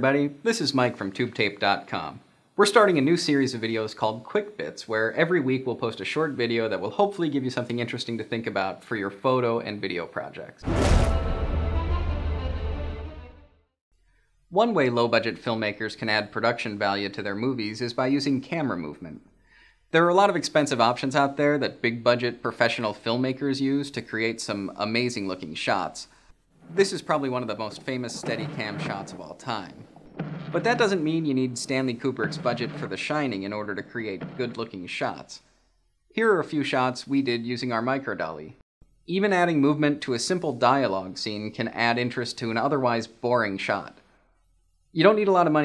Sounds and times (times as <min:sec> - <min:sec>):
Speech: 0:00.0 - 0:10.6, 0:14.5 - 0:19.2, 0:19.9 - 0:26.1, 0:26.7 - 0:29.8, 0:30.6 - 0:35.4, 0:36.2 - 0:44.0, 0:45.0 - 0:45.6.